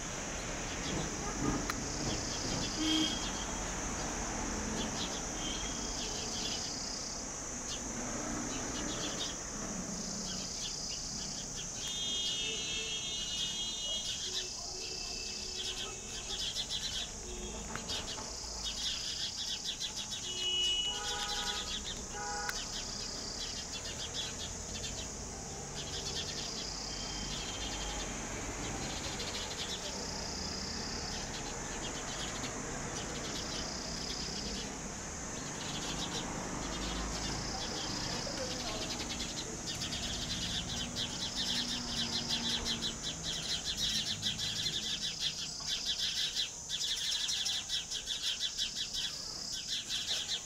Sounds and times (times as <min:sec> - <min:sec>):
Cricket: 0:00.0 - 0:50.4.